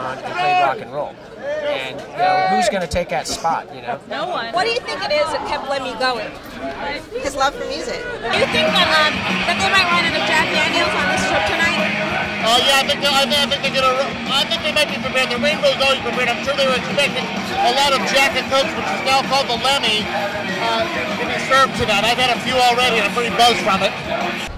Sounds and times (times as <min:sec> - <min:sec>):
Music: 0:08.3 - 0:24.5.